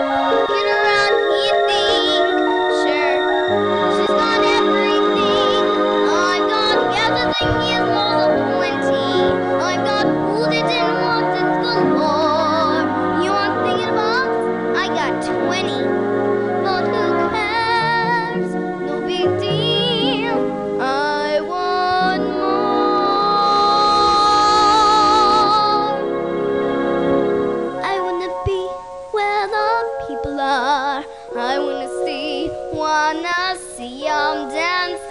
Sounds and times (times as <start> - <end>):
Music: 0.0 - 35.1
Child singing: 0.5 - 15.9, 16.6 - 26.0, 27.8 - 35.1.